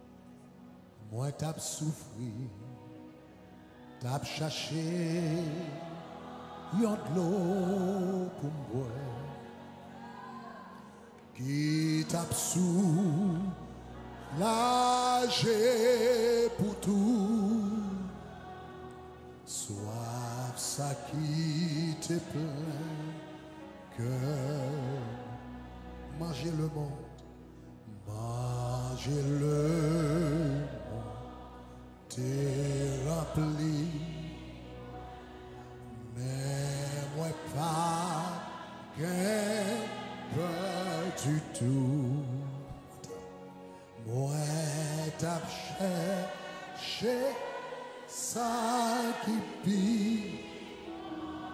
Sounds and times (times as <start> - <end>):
Music: 0.0 - 51.5.